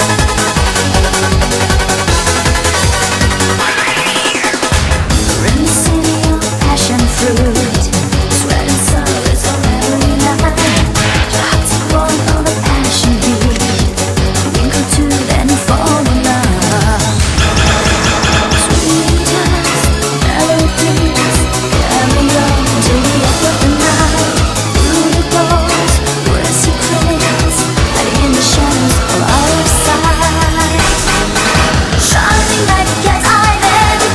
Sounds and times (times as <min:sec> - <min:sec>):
Music: 0:00.0 - 0:34.1.